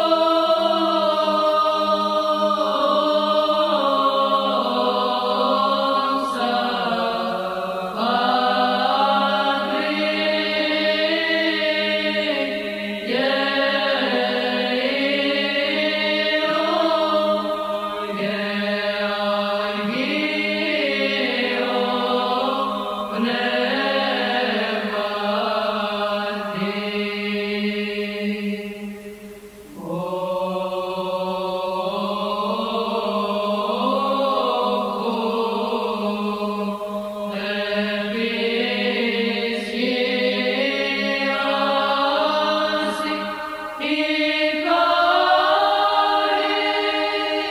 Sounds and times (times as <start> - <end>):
Mantra: 0.0 - 47.5.